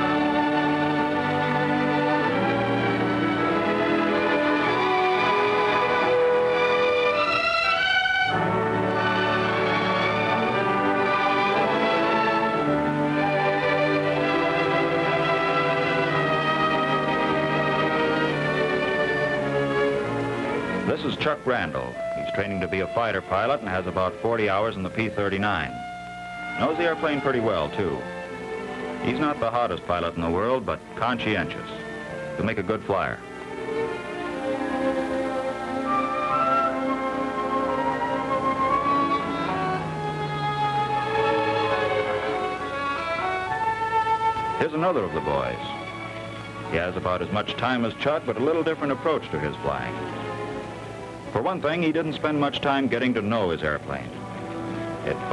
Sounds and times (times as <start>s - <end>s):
Music: 0.0s - 55.3s
Speech: 20.9s - 25.8s, 26.6s - 28.0s, 29.1s - 31.8s, 32.4s - 33.2s, 44.6s - 45.8s, 46.7s - 50.0s, 51.4s - 54.2s, 55.0s - 55.3s.